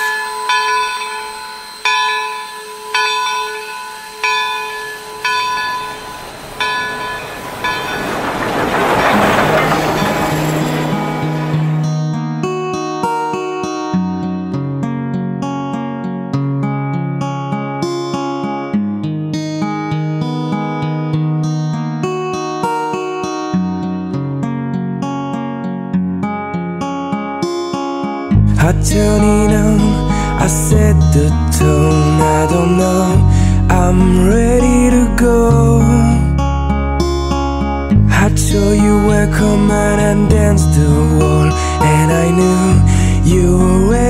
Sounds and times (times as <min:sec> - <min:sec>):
Outside, urban or manmade: 0:00.0 - 0:44.1
Music: 0:10.9 - 0:44.1.